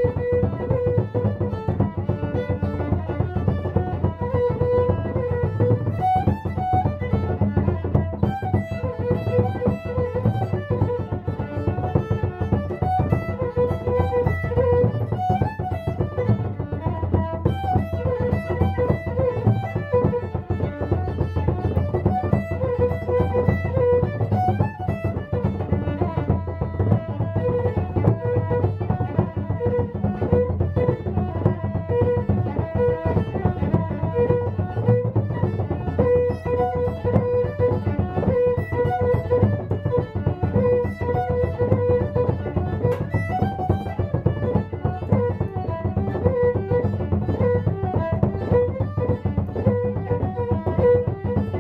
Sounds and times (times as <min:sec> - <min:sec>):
Violin, fiddle: 0:00.0 - 0:51.6.